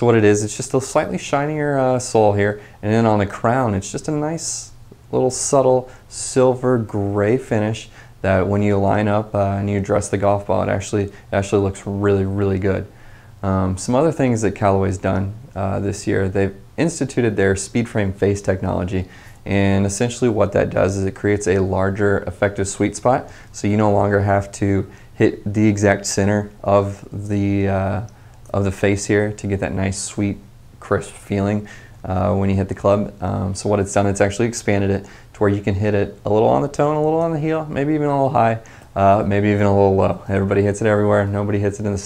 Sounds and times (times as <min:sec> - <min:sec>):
Speech: 0:00.0 - 0:42.0.